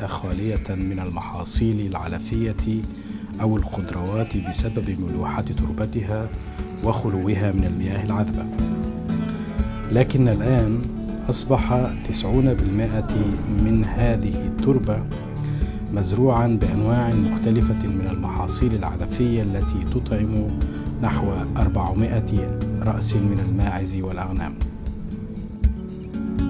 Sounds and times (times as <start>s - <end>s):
Speech: 0.0s - 2.8s, 3.4s - 8.5s, 9.9s - 15.1s, 15.9s - 24.6s
Music: 0.0s - 26.4s.